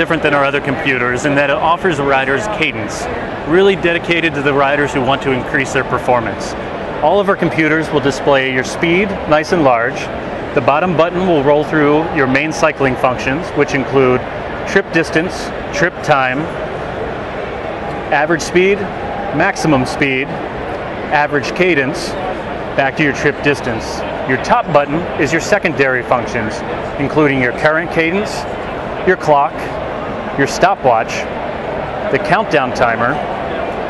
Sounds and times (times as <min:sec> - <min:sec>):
Speech: 0:00.0 - 0:16.5, 0:18.1 - 0:20.4, 0:21.1 - 0:22.2, 0:22.8 - 0:29.8, 0:30.4 - 0:31.3, 0:32.1 - 0:33.2.